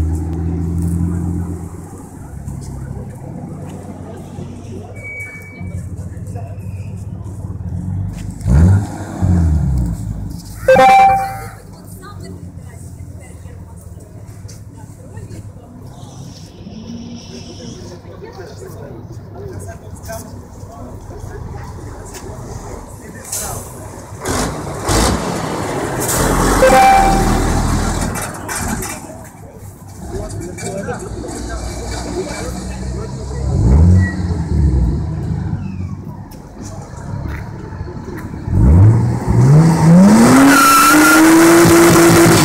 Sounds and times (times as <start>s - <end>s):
Speech: 11.3s - 24.0s, 28.3s - 34.6s.